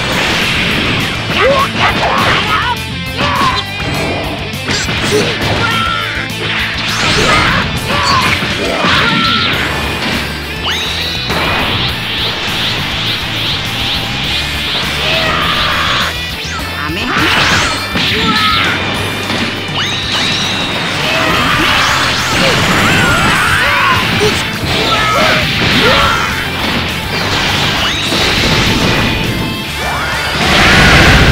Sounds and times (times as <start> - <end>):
Music: 0.0 - 31.3.